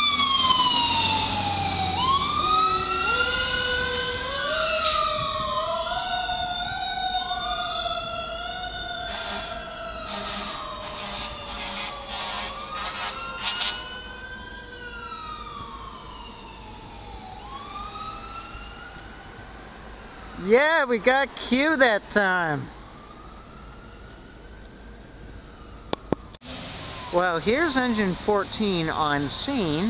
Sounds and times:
Vehicle: 0.0s - 29.9s
Speech: 20.4s - 22.7s, 27.2s - 29.9s.

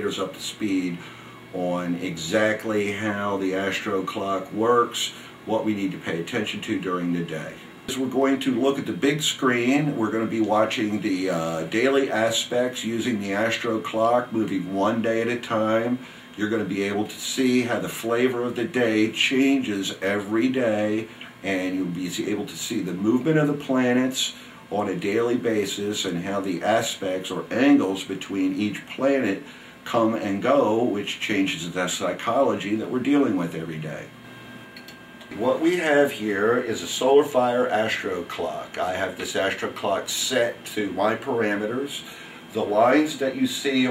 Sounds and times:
Speech: 0.0s - 34.2s, 35.3s - 43.9s.

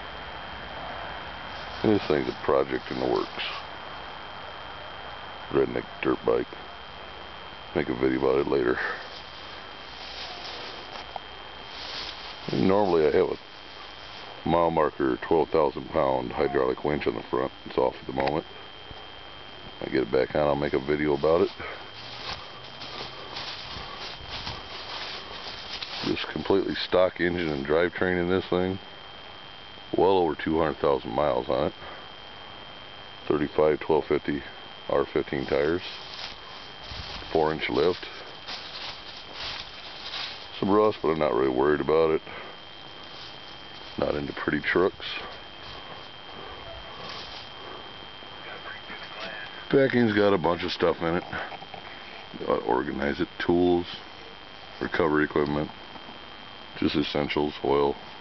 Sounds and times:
Speech: 1.8s - 3.6s, 5.5s - 6.6s, 7.7s - 9.1s, 12.4s - 13.4s, 14.4s - 18.5s, 19.8s - 21.8s, 25.9s - 28.8s, 29.9s - 31.9s, 33.2s - 36.0s, 37.2s - 38.2s, 40.6s - 42.4s, 44.0s - 45.4s, 48.5s - 51.6s, 52.3s - 54.0s, 54.8s - 55.8s, 56.8s - 58.0s.

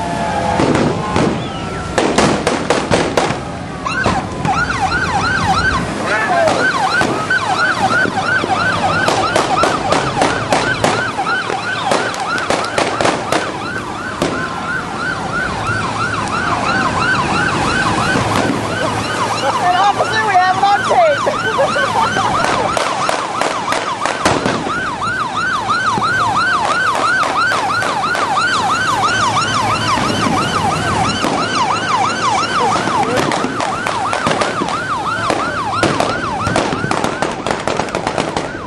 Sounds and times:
Speech: 19.4s - 21.3s.

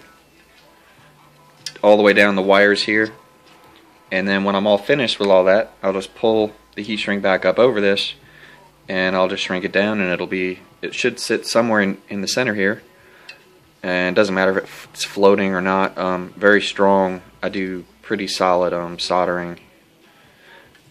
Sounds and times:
Speech: 1.7s - 3.2s, 4.1s - 8.2s, 8.9s - 12.8s, 13.8s - 19.7s.

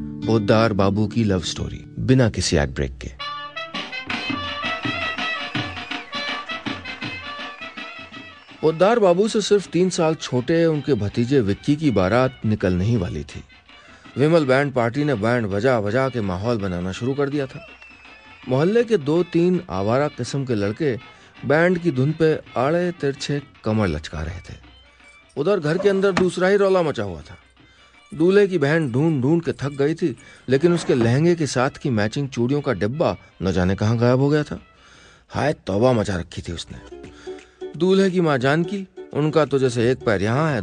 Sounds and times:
Music: 0.0s - 40.6s
Speech: 0.3s - 3.2s, 8.6s - 13.5s, 14.2s - 17.7s, 18.5s - 24.6s, 25.4s - 27.4s, 28.2s - 34.6s, 35.3s - 36.9s, 37.8s - 40.6s.

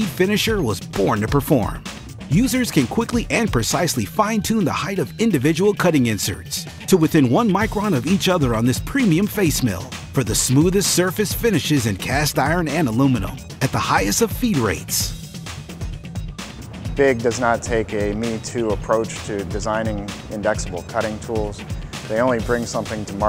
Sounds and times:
Speech: 0.0s - 15.1s, 17.0s - 23.2s
Music: 0.0s - 23.2s.

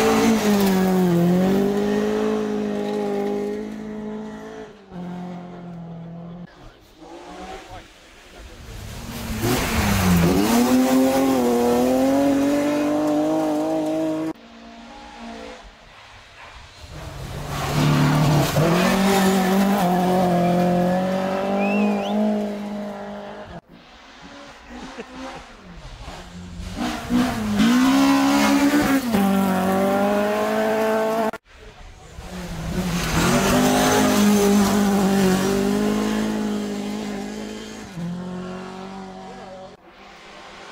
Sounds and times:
Race car, auto racing: 0.0s - 40.7s.

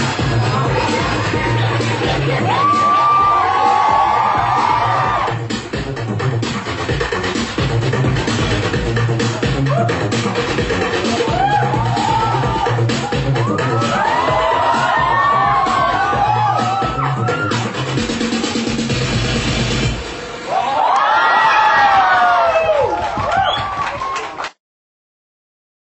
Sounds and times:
Music: 0.0s - 24.6s.

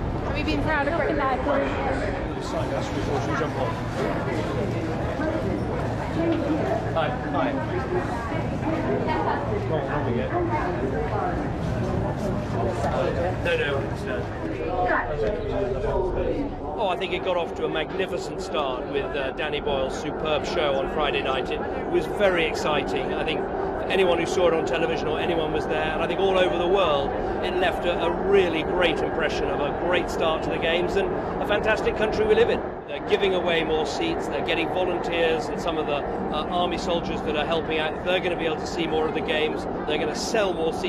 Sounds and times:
Speech: 0.3s - 40.8s.

